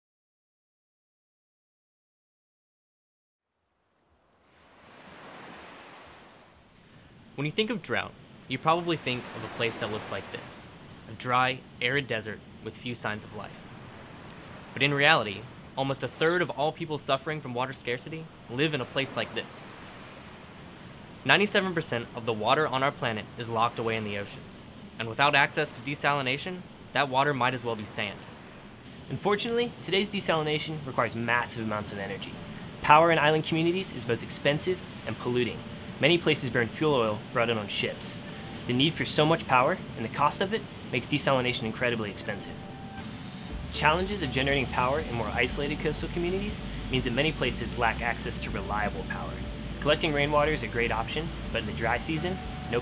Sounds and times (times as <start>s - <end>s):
Speech: 7.4s - 13.6s, 14.8s - 19.7s, 21.2s - 28.2s, 29.1s - 42.6s, 43.7s - 52.8s.